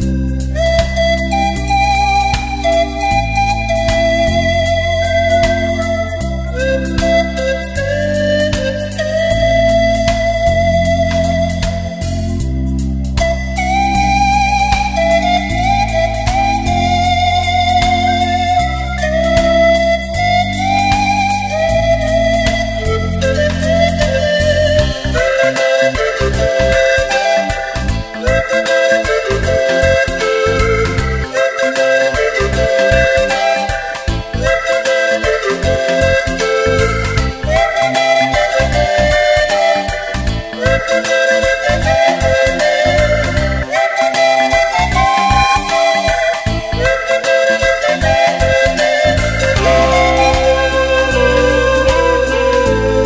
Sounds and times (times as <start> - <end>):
Music: 0.0 - 53.0.